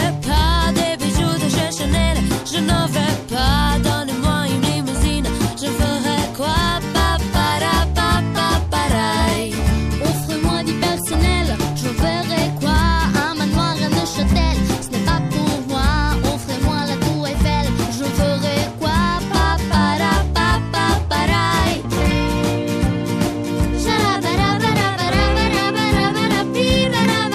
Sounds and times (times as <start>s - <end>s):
Rhythm and blues: 0.0s - 27.3s.